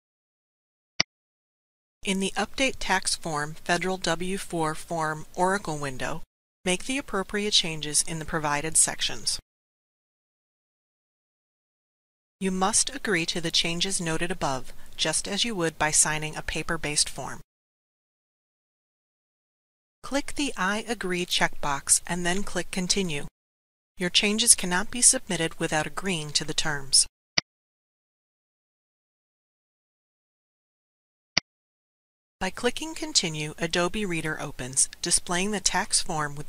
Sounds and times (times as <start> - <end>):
Speech synthesizer: 2.1 - 9.4, 12.4 - 17.4, 20.1 - 23.3, 24.0 - 27.1, 32.4 - 36.4.